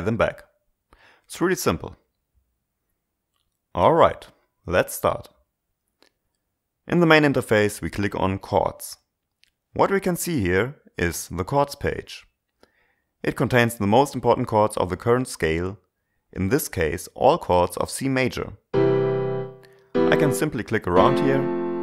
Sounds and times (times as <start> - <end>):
Speech: 0.0 - 0.6, 1.3 - 2.1, 3.7 - 5.4, 6.9 - 9.1, 9.8 - 12.4, 13.2 - 18.6, 20.1 - 21.5.